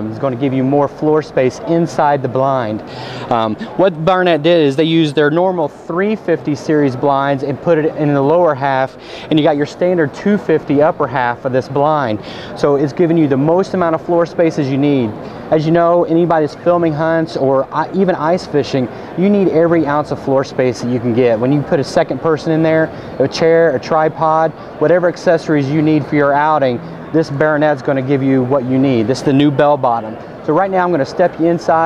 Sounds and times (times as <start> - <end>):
Speech: 0.0 - 31.8.